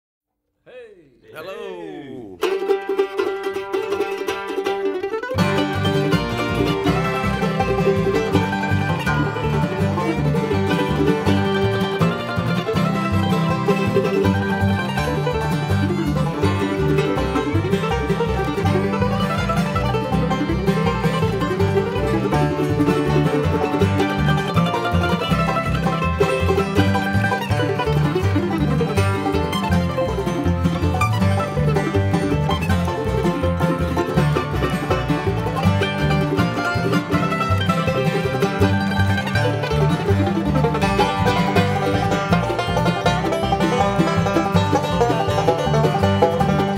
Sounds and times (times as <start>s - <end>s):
Speech: 0.6s - 2.4s
Guitar: 0.7s - 46.7s
Mandolin: 2.3s - 46.7s
Banjo: 2.4s - 46.7s
Country: 2.4s - 46.7s.